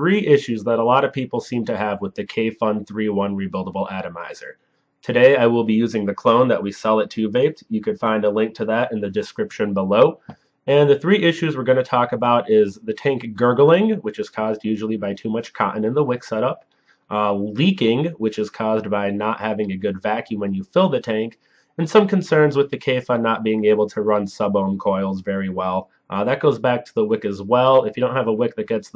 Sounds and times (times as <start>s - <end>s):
Speech: 0.0s - 4.5s, 5.1s - 28.9s.